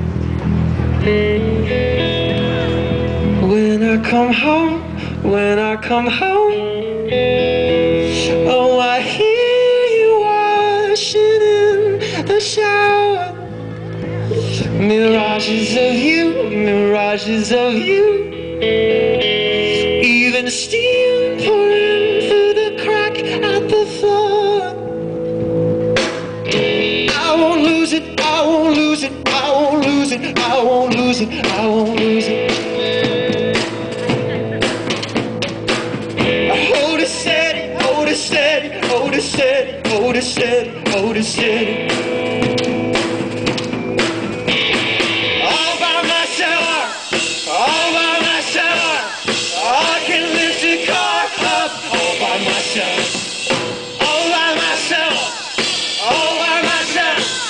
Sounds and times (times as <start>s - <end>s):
Music: 0.0s - 57.4s.